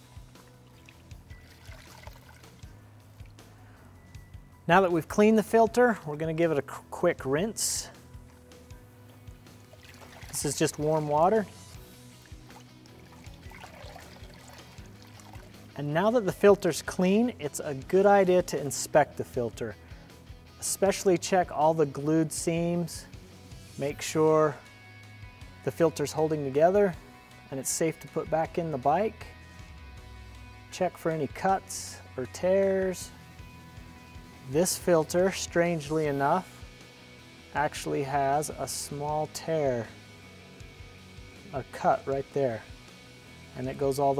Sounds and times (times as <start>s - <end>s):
Music: 0.0s - 44.1s
Speech: 4.7s - 8.0s, 10.3s - 11.6s, 15.8s - 19.8s, 20.6s - 23.1s, 23.8s - 24.6s, 25.6s - 29.3s, 30.7s - 33.2s, 34.5s - 36.5s, 37.6s - 40.0s, 41.5s - 42.7s, 43.6s - 44.1s.